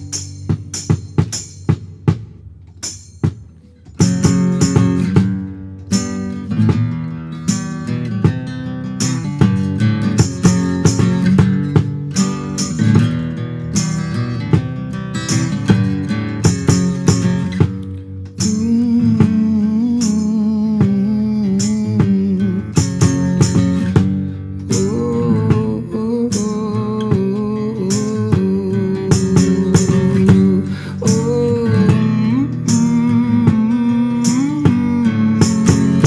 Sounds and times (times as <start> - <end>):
Music: 0.0 - 36.0.